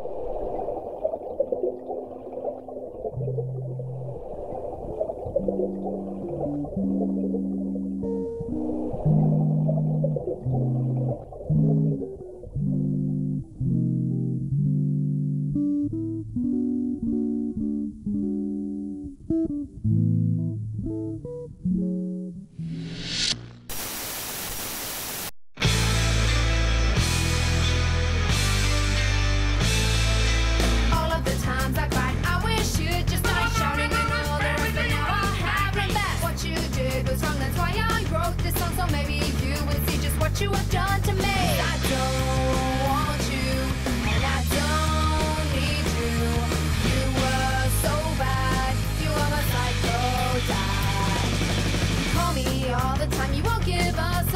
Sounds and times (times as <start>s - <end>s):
Music: 6.6s - 23.6s, 25.6s - 54.3s.